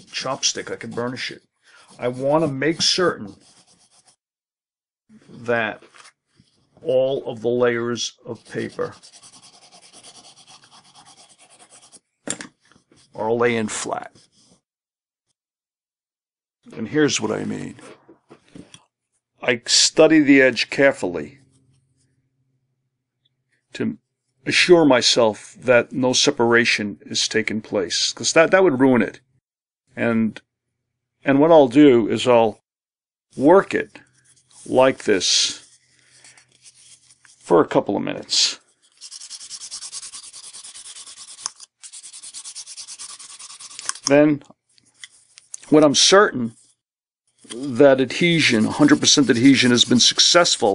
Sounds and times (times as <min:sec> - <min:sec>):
Speech: 0:00.0 - 0:03.4, 0:05.3 - 0:05.9, 0:06.8 - 0:09.0, 0:13.2 - 0:14.2, 0:16.7 - 0:18.0, 0:19.4 - 0:21.4, 0:23.8 - 0:29.2, 0:30.0 - 0:30.4, 0:31.2 - 0:32.6, 0:33.4 - 0:34.0, 0:34.7 - 0:35.7, 0:37.5 - 0:38.6, 0:44.1 - 0:44.5, 0:45.6 - 0:46.6, 0:47.5 - 0:50.7
Inside, small room: 0:05.0 - 0:15.4.